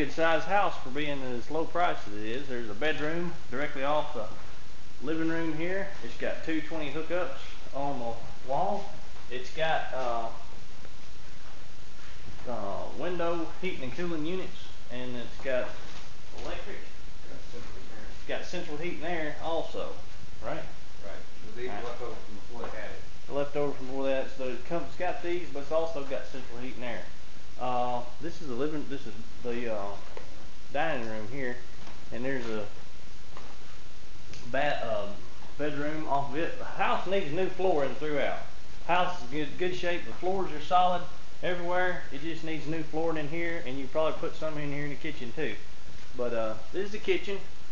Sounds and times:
Speech: 0:00.0 - 0:04.4, 0:05.0 - 0:10.5, 0:12.4 - 0:30.1, 0:30.7 - 0:32.8, 0:34.4 - 0:45.6, 0:46.2 - 0:47.5.

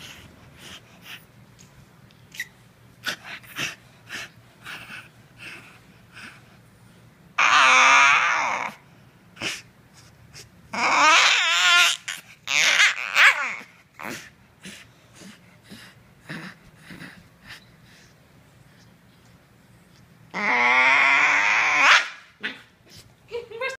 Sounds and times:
Speech: 0:23.3 - 0:23.7.

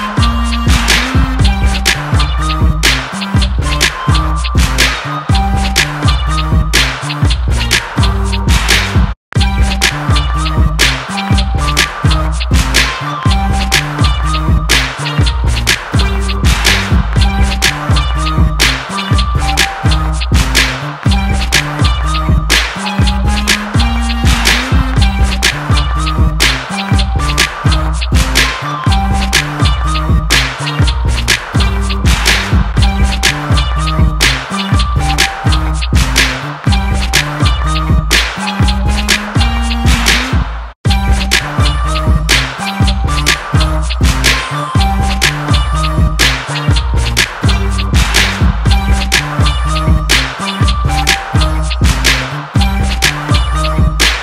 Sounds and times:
Electronic dance music: 0:00.0 - 0:54.2.

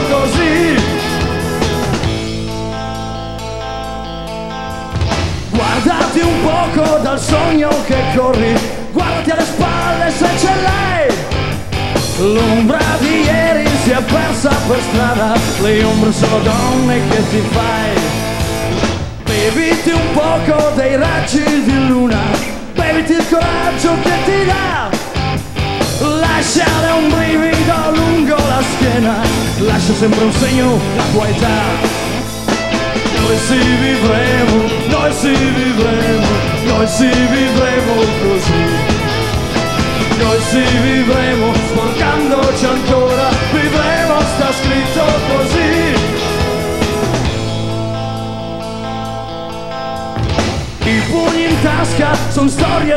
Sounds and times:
Music: 0:00.0 - 0:52.9.

